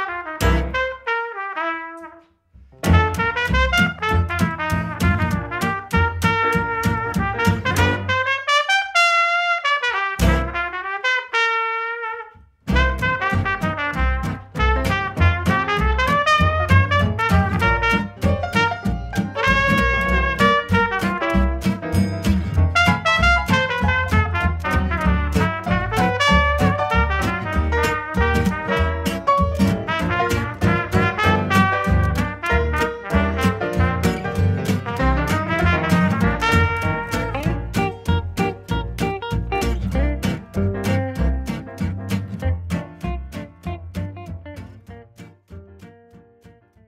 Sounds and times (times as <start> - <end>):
Swing music: 0.0 - 46.6.